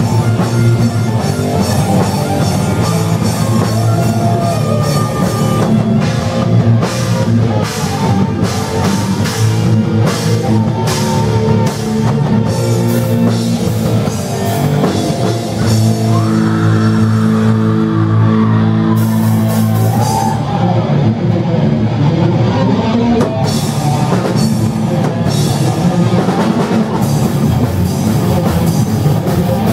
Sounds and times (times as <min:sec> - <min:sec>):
Heavy metal: 0:00.0 - 0:29.7
Inside, large room or hall: 0:00.0 - 0:29.7
Shout: 0:02.2 - 0:06.9, 0:15.8 - 0:21.2.